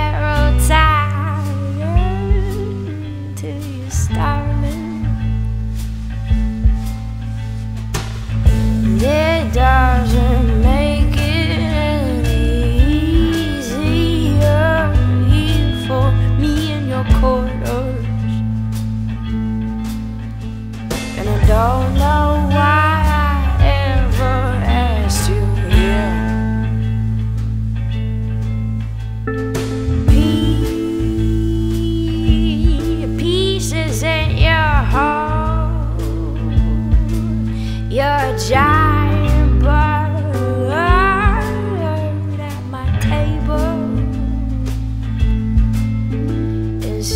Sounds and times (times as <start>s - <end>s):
Blues: 0.0s - 47.1s.